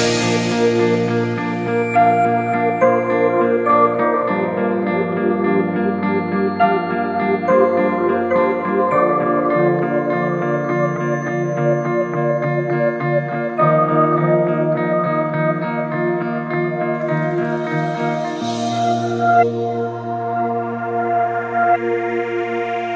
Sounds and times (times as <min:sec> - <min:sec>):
Electric piano: 0:00.0 - 0:22.9.